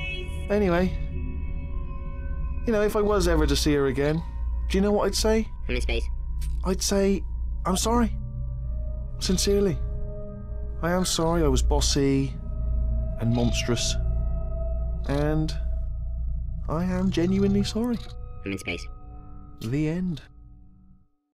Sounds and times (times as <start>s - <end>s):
Speech synthesizer: 0.0s - 1.0s, 2.7s - 8.1s, 9.2s - 9.8s, 10.8s - 12.3s, 13.2s - 14.0s, 15.1s - 15.6s, 16.7s - 18.9s, 19.6s - 20.2s
Male speech, man speaking: 0.5s - 1.0s, 2.7s - 8.1s, 9.2s - 9.8s, 10.8s - 12.4s, 13.2s - 14.0s, 15.1s - 15.6s, 16.7s - 18.9s, 19.6s - 20.3s
Narration, monologue: 2.6s - 15.9s, 16.5s - 20.5s.